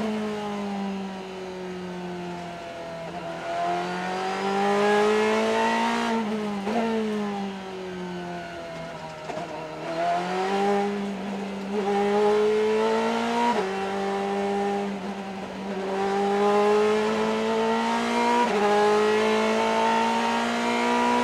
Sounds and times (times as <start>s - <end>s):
Car: 0.0s - 21.2s.